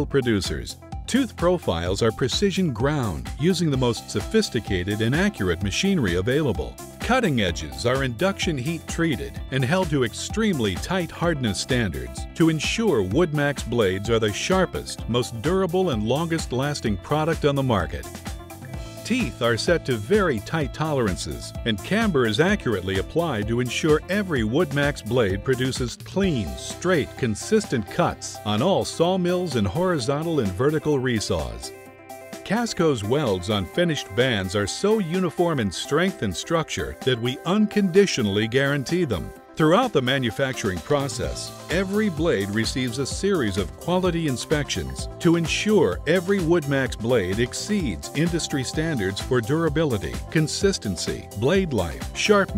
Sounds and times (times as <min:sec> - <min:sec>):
Speech: 0:00.0 - 0:18.4, 0:19.0 - 0:31.7, 0:32.4 - 0:52.5
Music: 0:00.0 - 0:52.5.